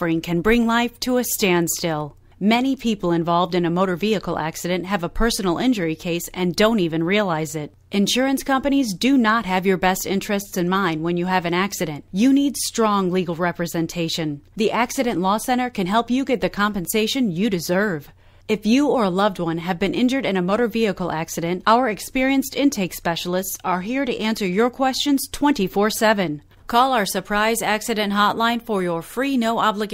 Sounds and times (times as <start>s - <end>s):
Speech: 0.0s - 29.9s.